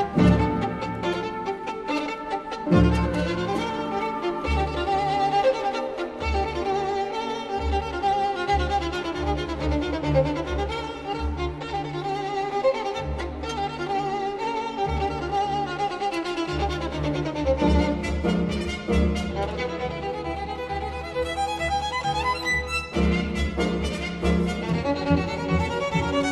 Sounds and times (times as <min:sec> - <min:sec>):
Violin, fiddle: 0:00.0 - 0:26.3.